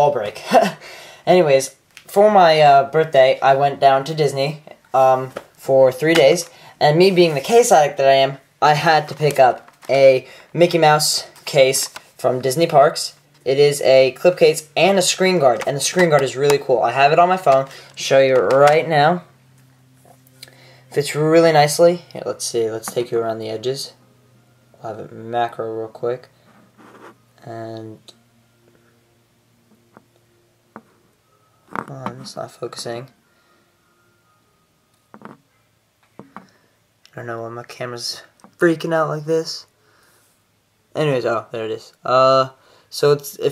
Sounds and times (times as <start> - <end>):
Speech: 0.0 - 19.3, 20.9 - 24.0, 24.8 - 26.3, 27.4 - 28.2, 31.9 - 33.1, 37.1 - 39.7, 40.9 - 43.5.